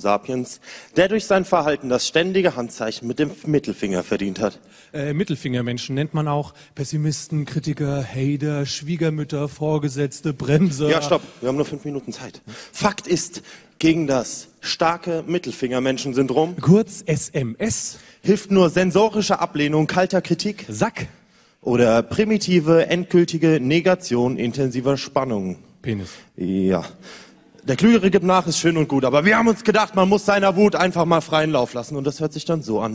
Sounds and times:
Speech: 0:00.0 - 0:27.0, 0:27.6 - 0:32.9.

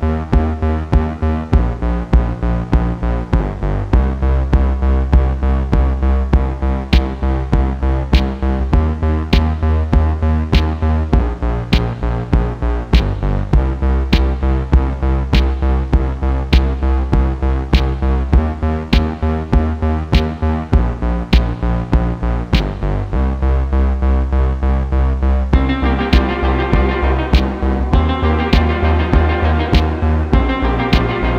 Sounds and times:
Music: 0:00.0 - 0:31.3.

